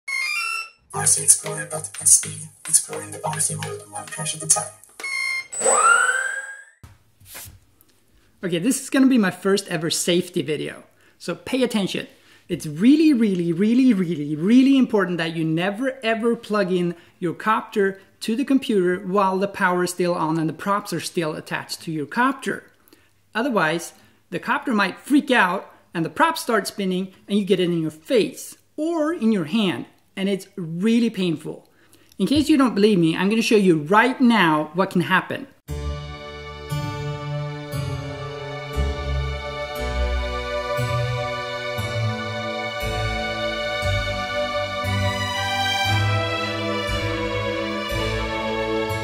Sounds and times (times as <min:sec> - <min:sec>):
Inside, small room: 0:00.0 - 0:49.0
Speech: 0:01.0 - 0:04.6, 0:08.4 - 0:22.7, 0:23.3 - 0:35.6.